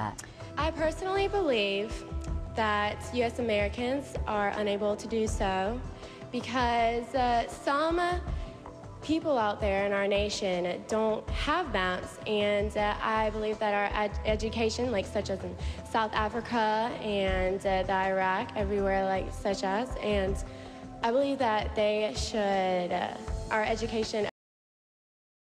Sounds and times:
Female speech, woman speaking: 0:00.0 - 0:02.0, 0:02.6 - 0:05.8, 0:06.4 - 0:08.3, 0:09.1 - 0:20.4, 0:21.0 - 0:24.4
Music: 0:00.0 - 0:24.4
Narration, monologue: 0:00.0 - 0:24.4.

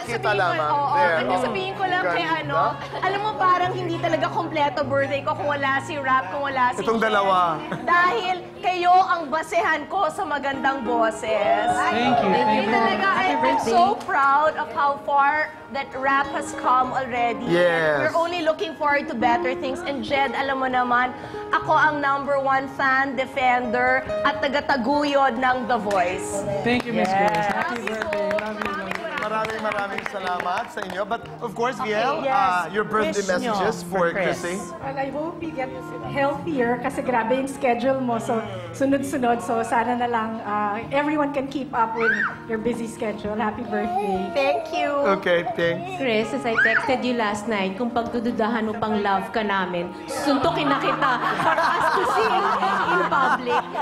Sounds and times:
Female speech, woman speaking: 0:00.0 - 0:07.0, 0:07.7 - 0:29.4, 0:31.8 - 0:45.2, 0:45.9 - 0:53.8.

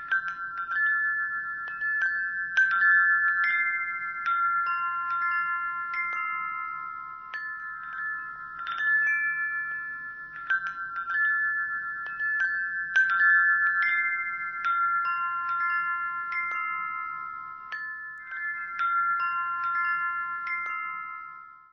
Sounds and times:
Wind chime: 0:00.0 - 0:21.7.

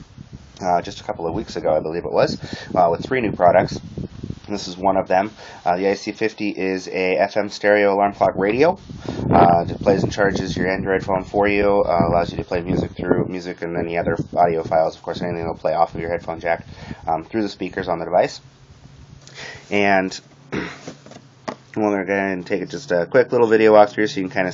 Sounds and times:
Speech: 0:00.6 - 0:03.8, 0:04.5 - 0:18.4, 0:19.7 - 0:20.2, 0:21.8 - 0:24.5.

